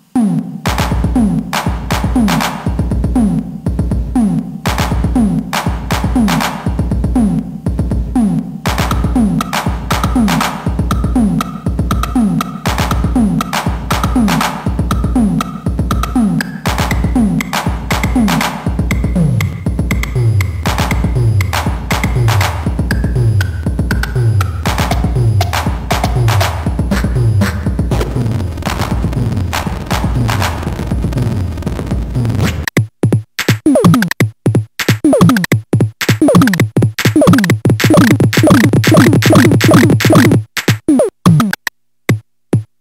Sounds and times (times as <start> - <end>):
Music: 0.0 - 40.5.